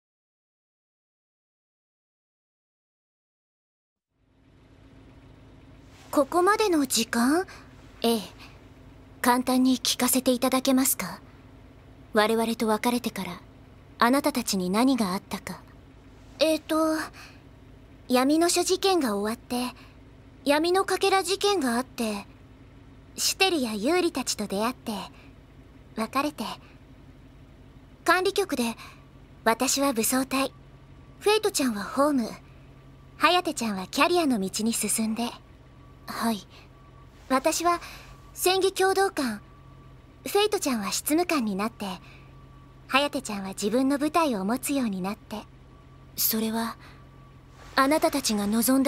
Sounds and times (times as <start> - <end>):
Speech: 6.1 - 8.5, 9.2 - 11.2, 12.1 - 15.7, 16.4 - 17.3, 18.1 - 19.8, 20.4 - 22.3, 23.2 - 25.2, 26.0 - 26.7, 28.0 - 30.5, 31.2 - 32.4, 33.2 - 35.4, 36.1 - 36.7, 37.3 - 39.4, 40.2 - 42.1, 42.9 - 45.5, 46.2 - 46.9, 47.7 - 48.8.